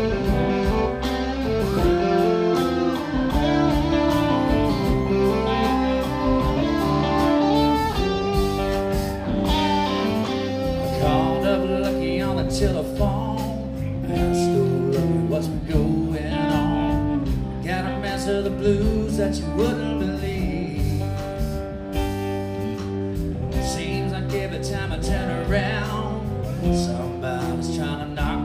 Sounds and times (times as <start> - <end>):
Music: 0.0 - 28.4.